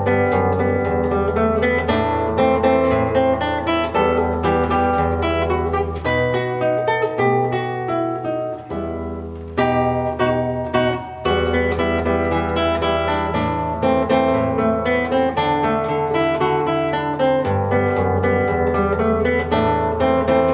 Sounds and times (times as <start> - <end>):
Acoustic guitar: 0.0 - 20.5
Strum: 0.0 - 20.5.